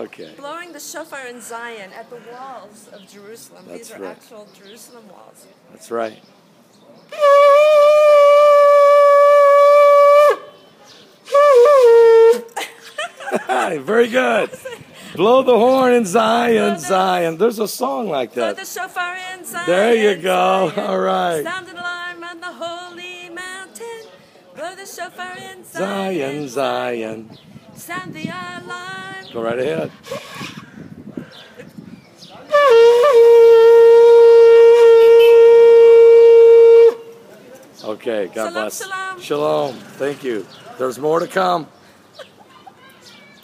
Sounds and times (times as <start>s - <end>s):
Shofar: 7.1s - 10.6s, 11.3s - 12.5s, 32.5s - 37.2s
Wind instrument, woodwind instrument: 7.1s - 10.7s, 11.3s - 12.6s, 32.5s - 37.2s.